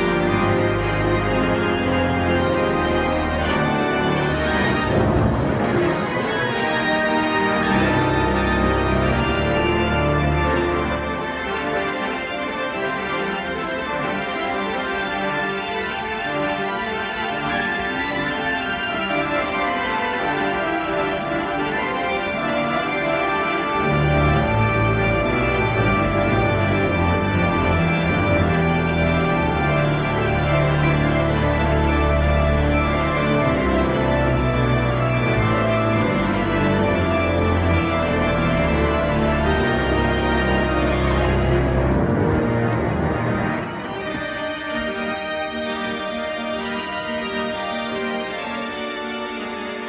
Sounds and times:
Classical music: 0.0s - 49.8s
Organ: 0.0s - 49.8s
Piano: 0.0s - 49.8s.

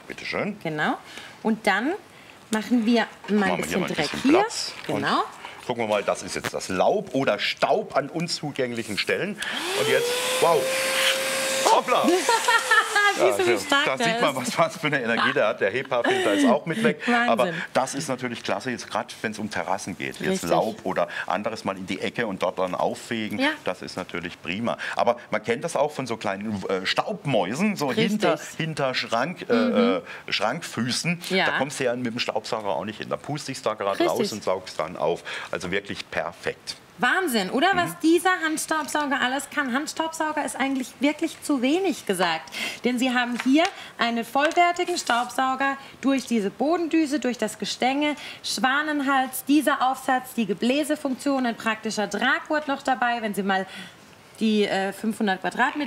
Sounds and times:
Vacuum cleaner: 9.5s - 13.4s.

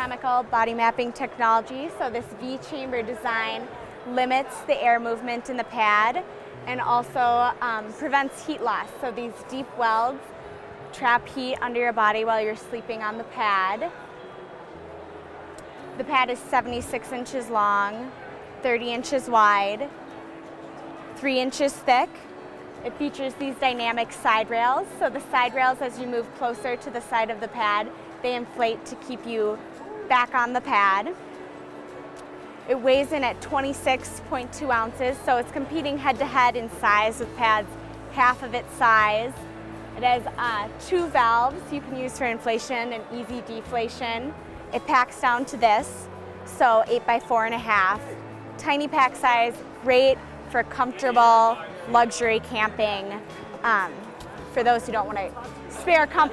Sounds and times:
Music: 0.0s - 56.3s.

